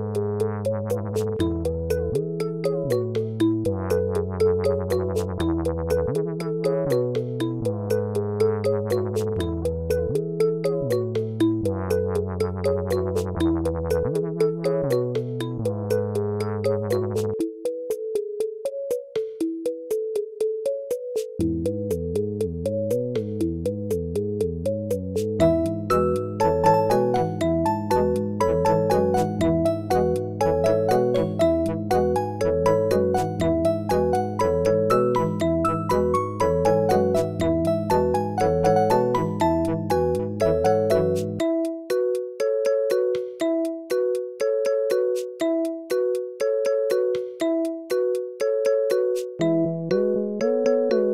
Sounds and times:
Synthesizer: 0.0 - 51.1.

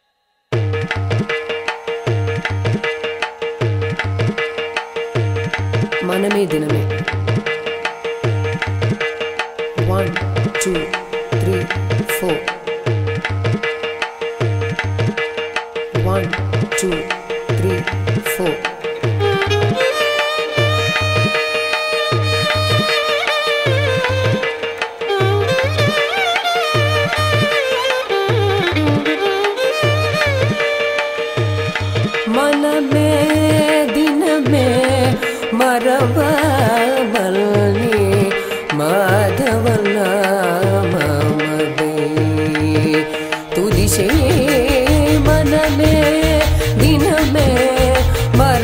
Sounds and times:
Tabla: 0.5 - 48.6.

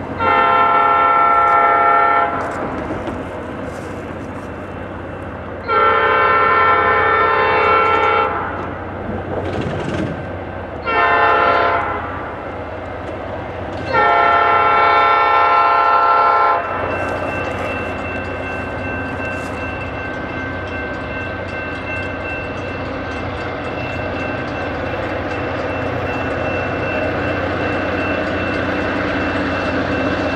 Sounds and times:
Outside, rural or natural: 0.0 - 30.3
Railroad car, train wagon: 0.0 - 30.3
Train: 0.0 - 30.3.

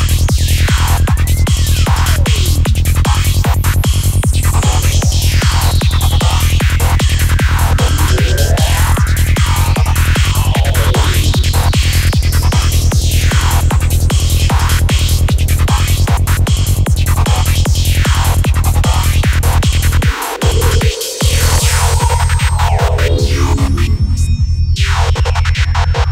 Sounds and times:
Trance music: 1.6 - 14.8, 19.5 - 25.0.

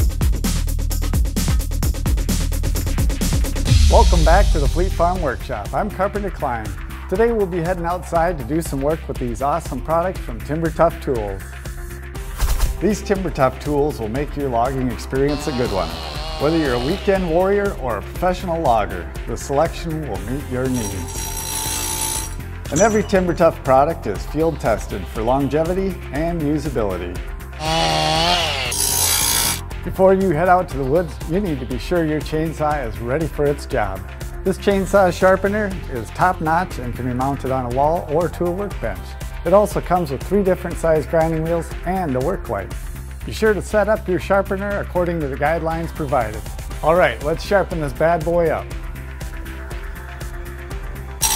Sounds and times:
Music: 0.0 - 51.3
Speech: 3.8 - 11.4, 12.8 - 21.1, 22.7 - 27.2, 29.8 - 48.7
Tools: 20.7 - 23.1, 28.7 - 29.6.

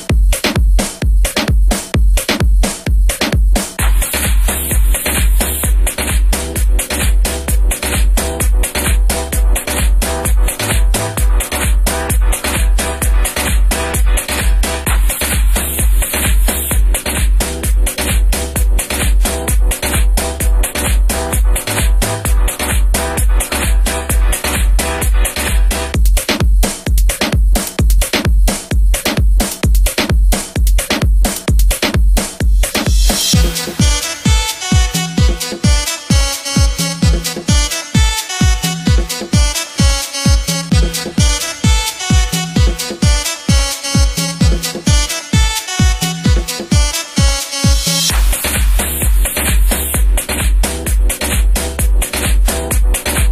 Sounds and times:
Techno: 0.0 - 53.3.

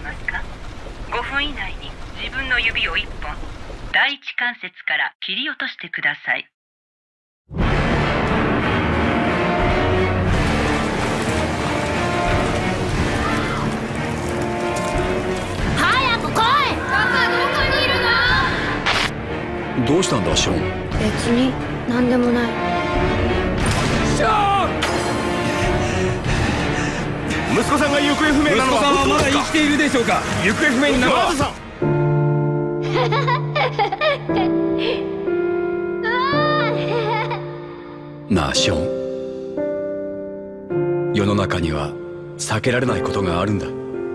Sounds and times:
Rain: 0.0 - 4.0, 10.2 - 17.4, 25.3 - 31.8.

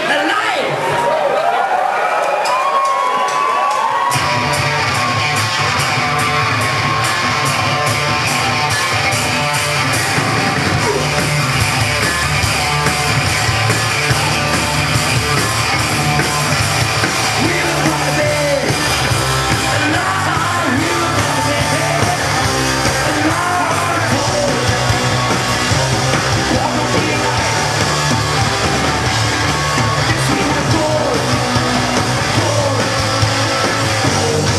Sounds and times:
Music: 3.2 - 34.5.

